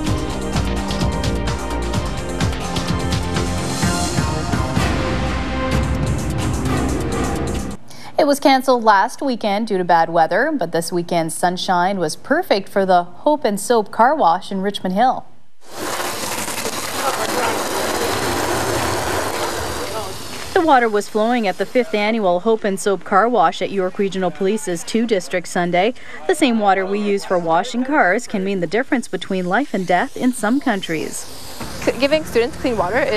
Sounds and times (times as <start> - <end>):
Speech: 8.2 - 15.3, 19.8 - 33.1.